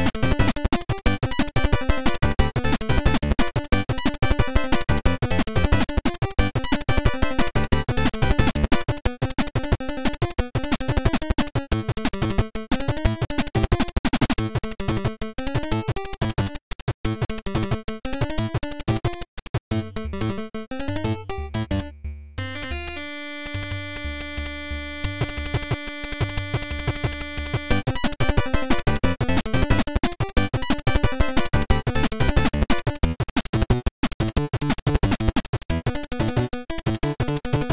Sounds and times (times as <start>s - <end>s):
Video game music: 0.0s - 37.7s.